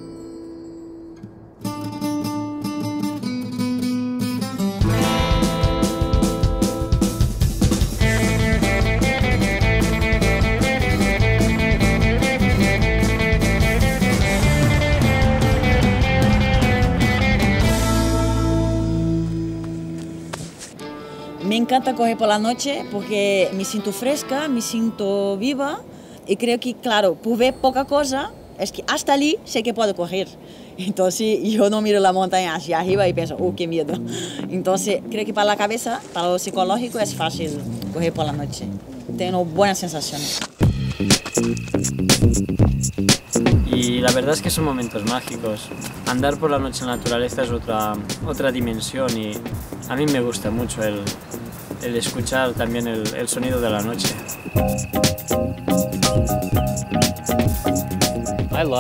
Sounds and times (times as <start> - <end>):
Music: 0.0 - 25.8, 32.9 - 35.4, 40.6 - 58.8
Speech: 21.4 - 40.3, 43.6 - 51.2, 51.8 - 54.2, 58.5 - 58.8.